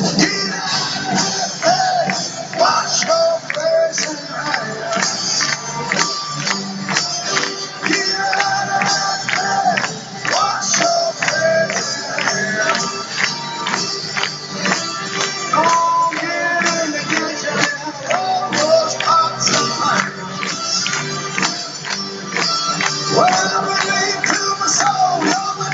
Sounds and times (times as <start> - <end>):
Music: 0.0 - 25.7.